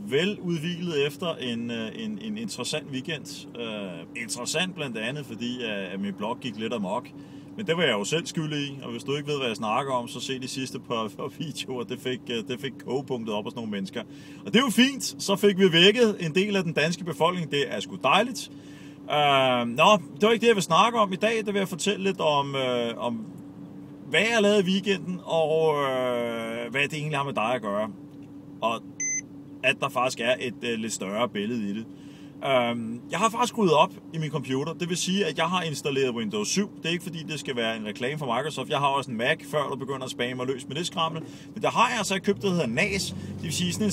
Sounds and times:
Speech: 0.0s - 18.5s, 19.1s - 23.3s, 24.1s - 28.0s, 28.6s - 28.8s, 29.6s - 43.9s.

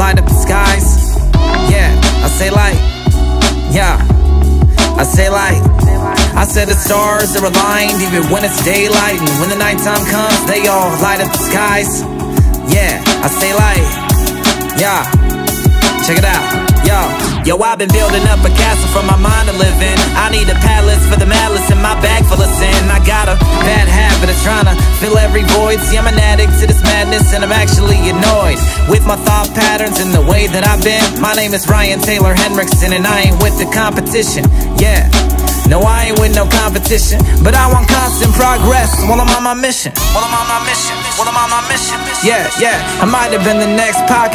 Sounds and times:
Rhythm and blues: 0.0s - 44.3s.

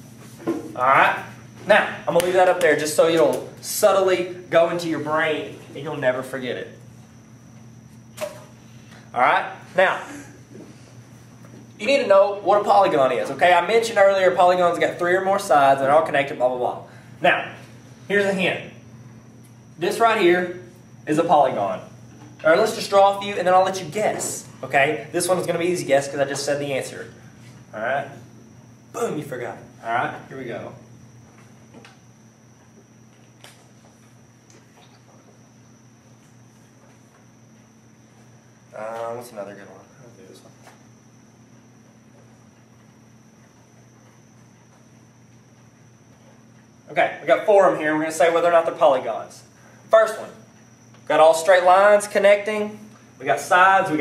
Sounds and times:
Speech: 29.0s - 30.8s, 46.9s - 50.5s, 51.1s - 54.0s.

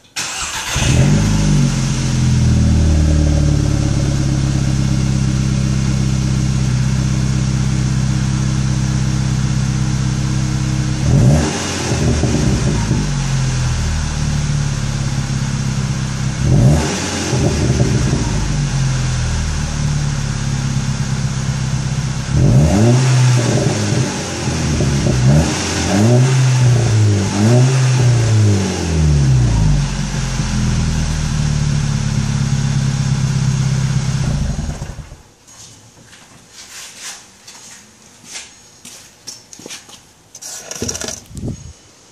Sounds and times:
Vehicle: 0.2s - 35.3s.

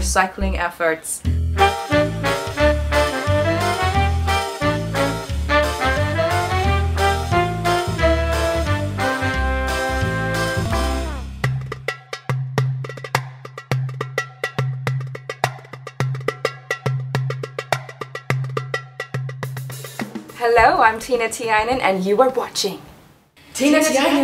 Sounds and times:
Music: 0.0s - 21.8s.

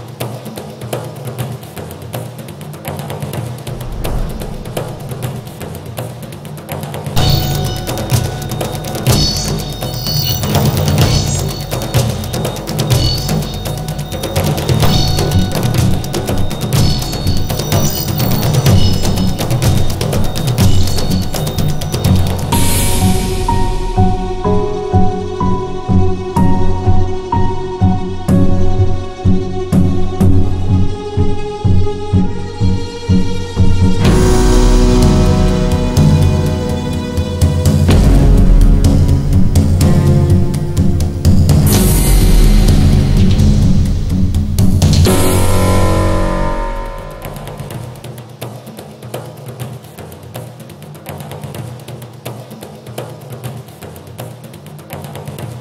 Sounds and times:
Music: 0.0s - 55.6s
Rattle: 3.0s - 22.6s.

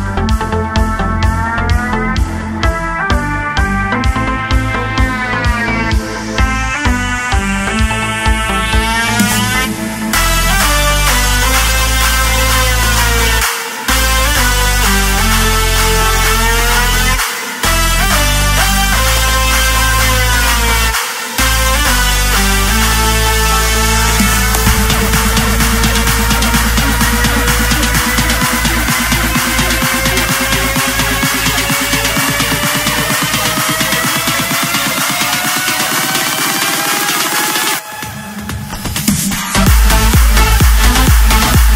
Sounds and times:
Music: 0.0s - 41.7s.

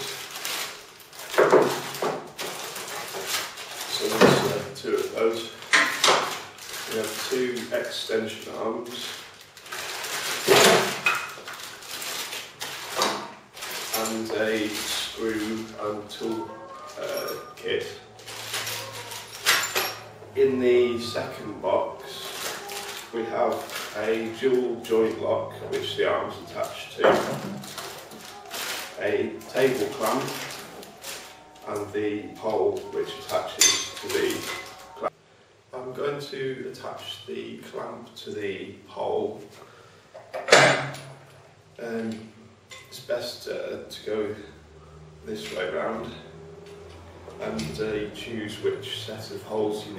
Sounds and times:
Speech: 3.9s - 5.6s, 6.8s - 9.2s, 13.9s - 18.2s, 20.4s - 35.1s, 35.7s - 39.6s, 41.8s - 44.6s, 45.2s - 46.4s, 47.4s - 49.9s.

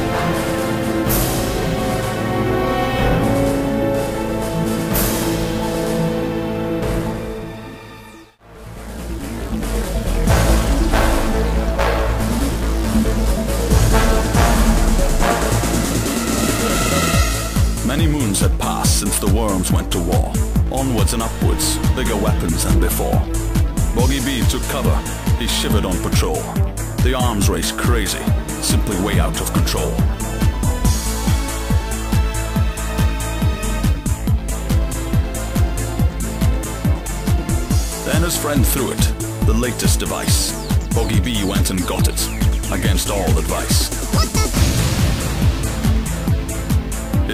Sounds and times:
Music: 0.0s - 47.3s
Speech: 17.8s - 23.3s, 23.9s - 30.1s, 38.0s - 44.6s.

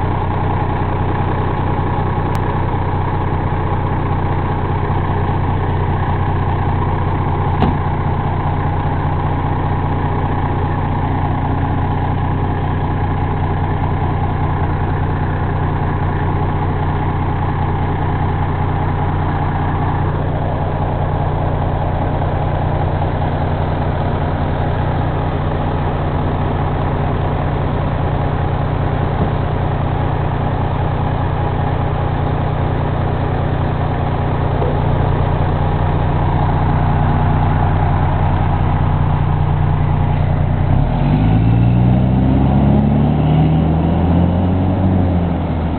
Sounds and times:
Truck: 0.0s - 45.7s.

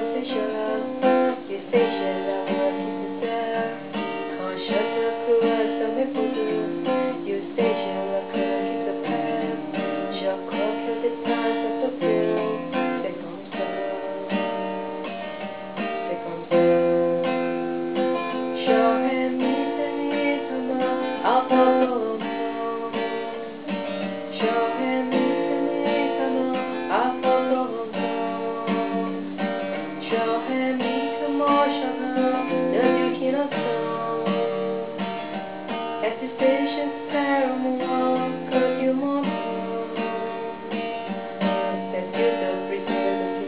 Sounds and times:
Acoustic guitar: 0.0s - 43.4s
Strum: 0.0s - 43.4s.

